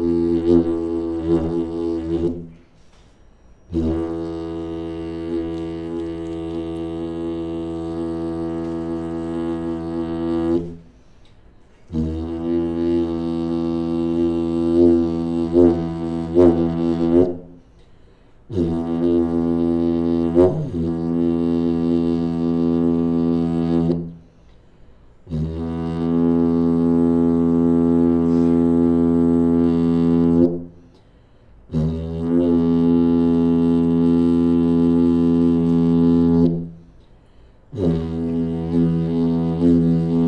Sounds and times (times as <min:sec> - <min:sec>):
Didgeridoo: 0:00.0 - 0:02.7, 0:03.7 - 0:11.0, 0:11.9 - 0:17.7, 0:18.5 - 0:24.2, 0:25.2 - 0:30.8, 0:31.7 - 0:36.9, 0:37.7 - 0:40.2.